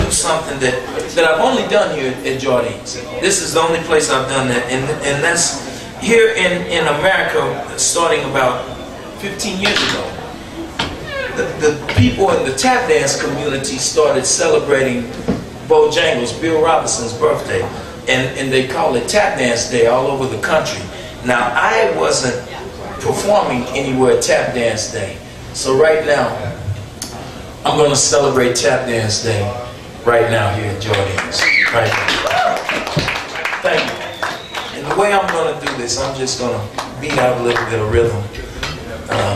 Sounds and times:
Speech: 0.0s - 10.4s, 11.1s - 26.6s, 27.6s - 32.1s, 33.3s - 39.3s.

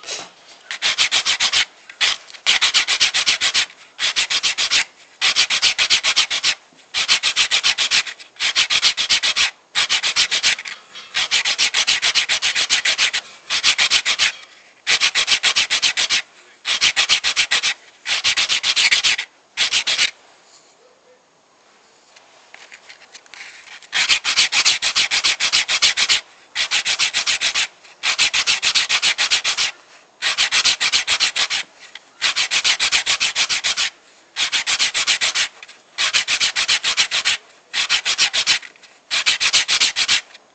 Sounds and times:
Rub: 0.0s - 20.1s, 22.5s - 40.4s.

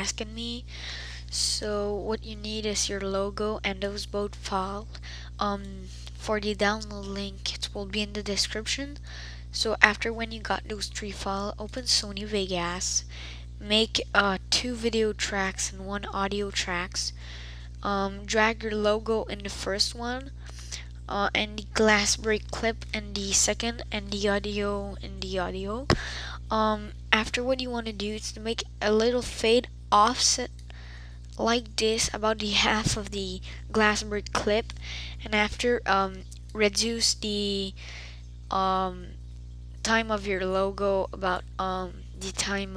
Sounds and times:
Speech: 0.0s - 30.6s, 31.4s - 39.2s, 39.8s - 42.7s.

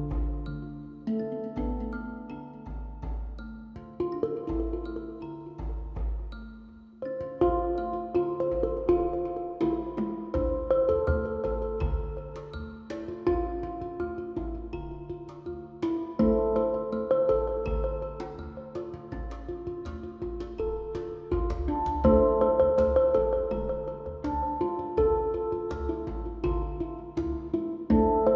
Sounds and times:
Vibraphone: 0.0s - 28.3s.

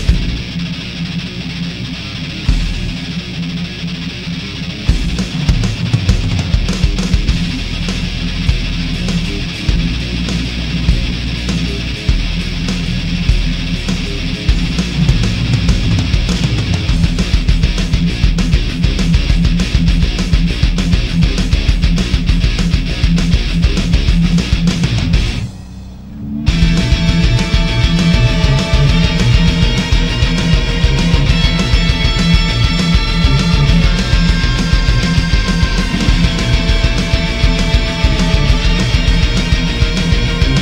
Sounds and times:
Music: 0.0s - 40.6s.

